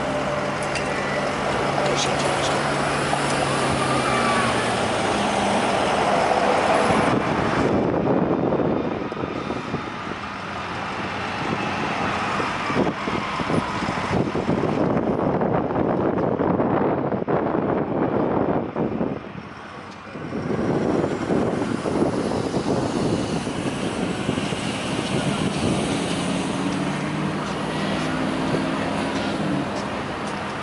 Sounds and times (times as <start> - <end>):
Train: 0.0 - 30.6.